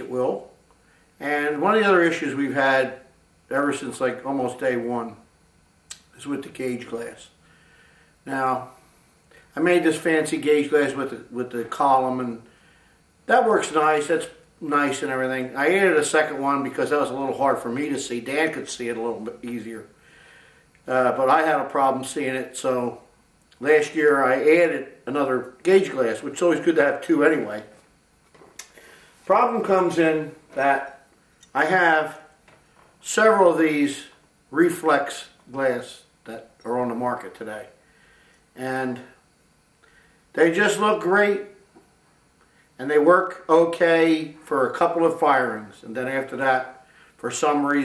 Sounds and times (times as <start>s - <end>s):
Speech: 0.0s - 0.5s, 1.2s - 5.3s, 5.9s - 7.4s, 8.2s - 8.8s, 9.5s - 12.5s, 13.3s - 19.9s, 20.9s - 27.8s, 29.3s - 31.0s, 31.6s - 32.3s, 33.0s - 37.8s, 38.6s - 39.2s, 40.3s - 41.6s, 42.8s - 47.8s.